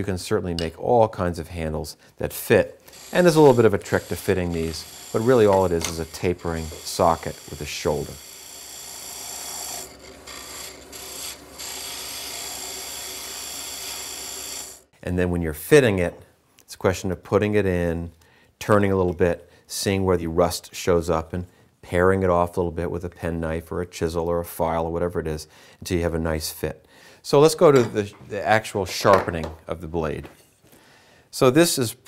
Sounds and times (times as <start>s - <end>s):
Speech: 0.0s - 8.2s, 15.0s - 30.4s, 31.4s - 32.0s
Wood: 3.4s - 7.5s, 27.7s - 29.6s
Tools: 5.2s - 6.8s.